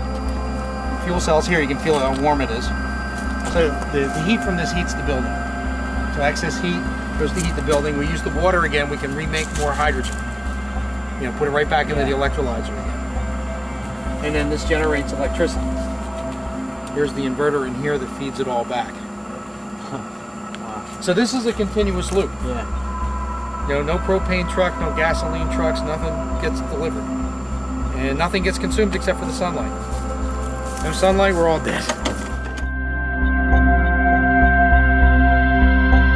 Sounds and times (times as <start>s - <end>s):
Speech: 1.0s - 2.7s, 3.5s - 5.3s, 6.2s - 10.2s, 11.2s - 12.8s, 14.2s - 15.7s, 17.0s - 19.1s, 20.6s - 22.7s, 23.7s - 27.1s, 28.0s - 29.8s, 30.8s - 32.0s.